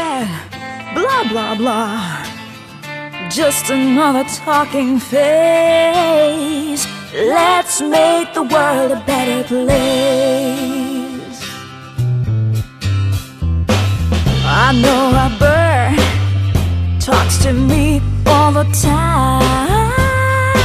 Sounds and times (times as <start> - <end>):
Music: 0.0 - 20.6.